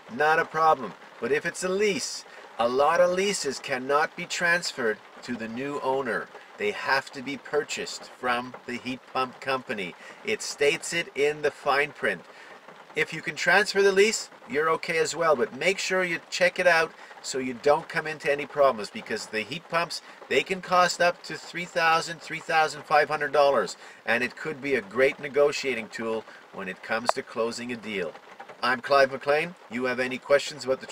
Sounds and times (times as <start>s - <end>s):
Speech: 0.0s - 12.3s, 13.0s - 30.9s.